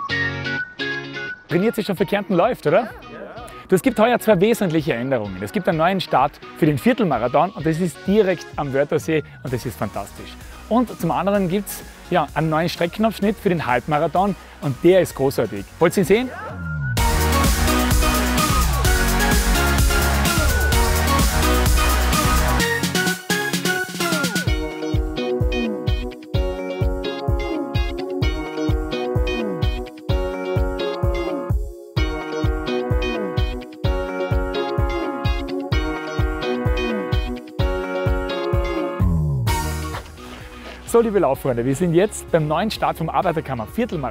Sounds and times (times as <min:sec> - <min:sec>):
Music: 0:00.0 - 0:44.1.